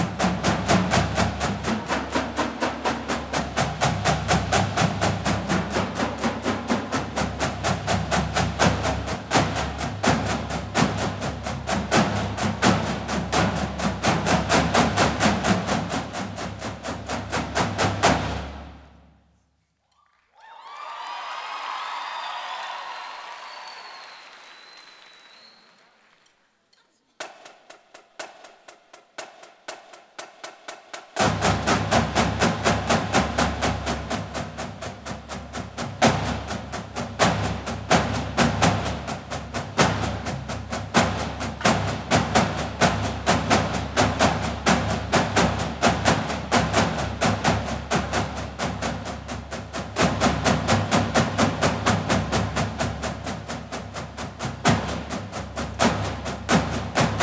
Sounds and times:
Drum: 0:00.0 - 0:19.0, 0:27.1 - 0:57.2.

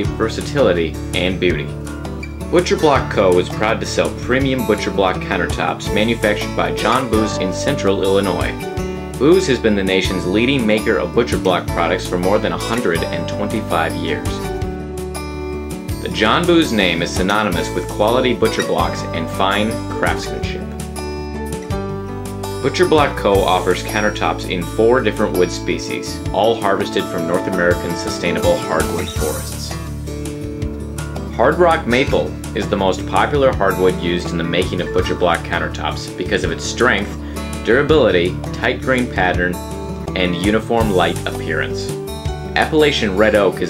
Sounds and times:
Speech: 0:00.0 - 0:01.8, 0:02.5 - 0:08.6, 0:09.2 - 0:14.5, 0:16.0 - 0:20.6, 0:22.6 - 0:29.8, 0:31.3 - 0:42.0, 0:42.6 - 0:43.6
Music: 0:00.0 - 0:43.6.

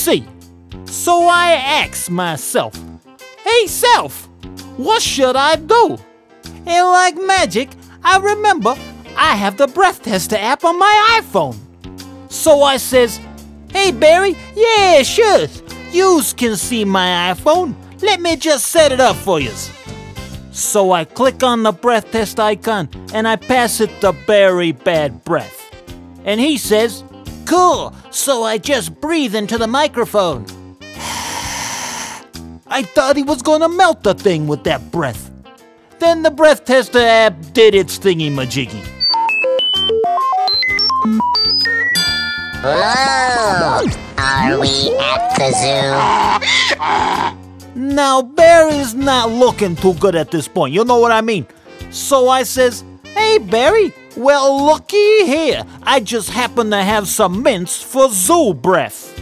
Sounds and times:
Speech: 0:00.0 - 0:00.3, 0:00.9 - 0:02.8, 0:03.5 - 0:04.2, 0:04.8 - 0:06.0, 0:06.7 - 0:11.6, 0:12.3 - 0:13.2, 0:13.8 - 0:19.7, 0:20.6 - 0:25.6, 0:26.2 - 0:30.4, 0:32.7 - 0:35.3, 0:36.0 - 0:38.9, 0:42.6 - 0:46.3, 0:47.8 - 0:59.1
Music: 0:00.0 - 0:59.2.

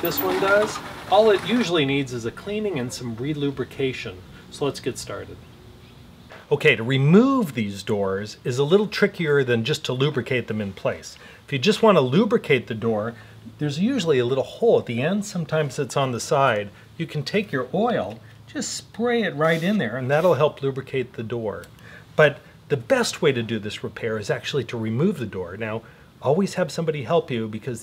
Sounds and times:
Speech: 0:00.0 - 0:05.5, 0:06.5 - 0:27.8.

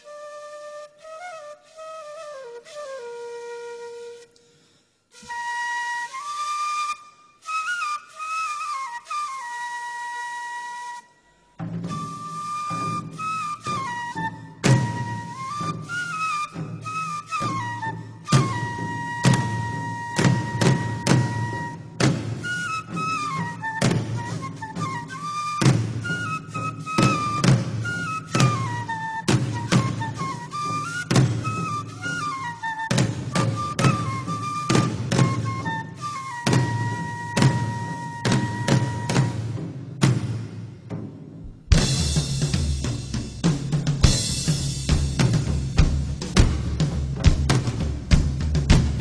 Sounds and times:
Whistle: 0:00.0 - 0:39.6.

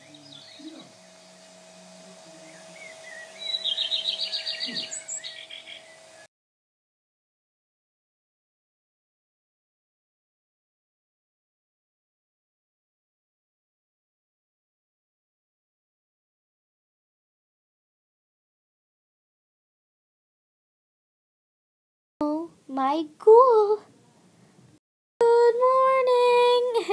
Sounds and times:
Chirp, tweet: 0:00.0 - 0:01.6, 0:02.3 - 0:06.3.

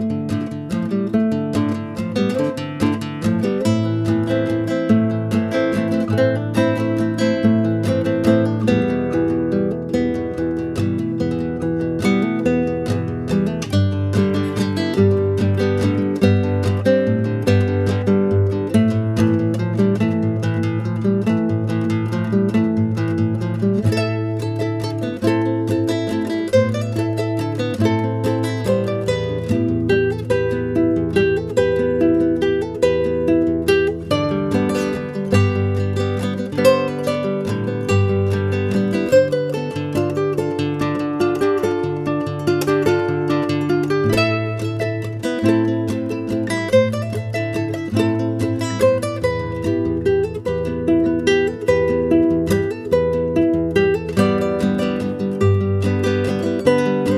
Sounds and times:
Guitar: 0:00.0 - 0:57.1.

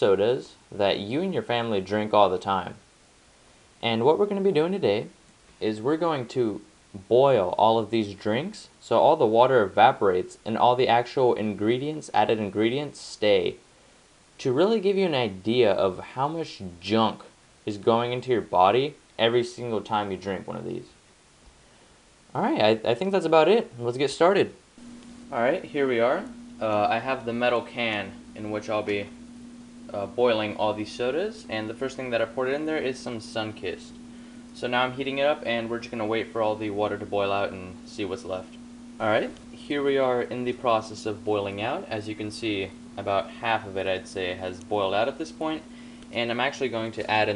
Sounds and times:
Speech: 0:00.0 - 0:02.8, 0:03.8 - 0:13.6, 0:14.4 - 0:21.0, 0:22.3 - 0:24.6, 0:25.3 - 0:29.2, 0:29.9 - 0:34.0, 0:34.6 - 0:47.3.

